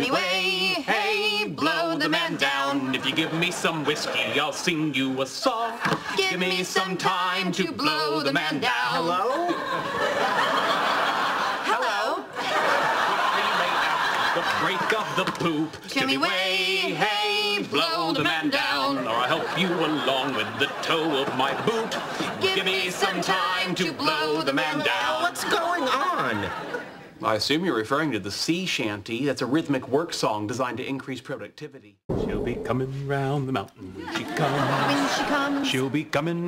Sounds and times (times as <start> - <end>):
Male speech, man speaking: 2.9 - 5.8, 14.4 - 15.8, 19.0 - 22.0, 25.7 - 26.6, 27.2 - 36.4.